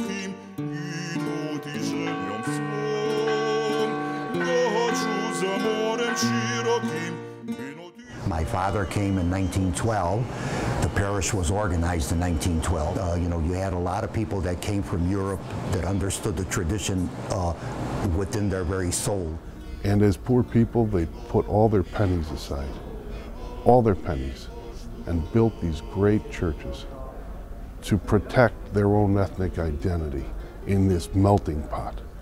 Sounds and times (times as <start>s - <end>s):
Music: 0.0s - 11.6s, 18.4s - 27.0s
Speech: 8.2s - 10.2s, 10.8s - 22.8s, 23.7s - 24.5s, 25.1s - 27.2s, 27.8s - 32.0s.